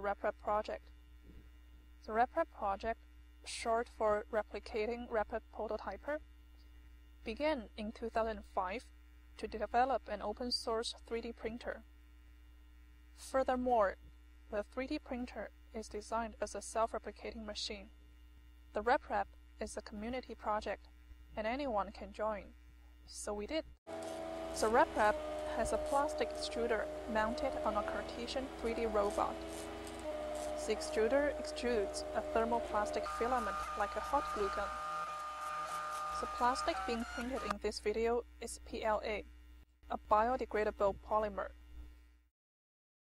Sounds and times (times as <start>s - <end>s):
Speech: 0.0s - 0.8s, 2.1s - 6.2s, 7.3s - 11.8s, 13.2s - 17.9s, 18.8s - 20.8s, 21.4s - 22.5s, 23.1s - 23.7s, 24.6s - 29.4s, 30.6s - 34.7s, 36.2s - 39.3s, 39.9s - 41.6s.